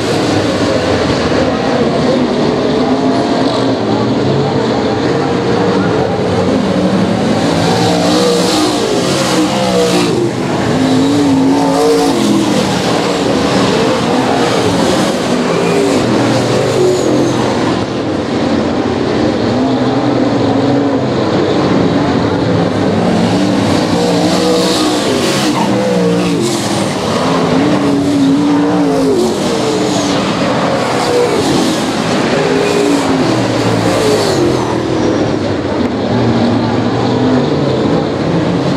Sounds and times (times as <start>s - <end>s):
Race car, auto racing: 0.0s - 38.7s.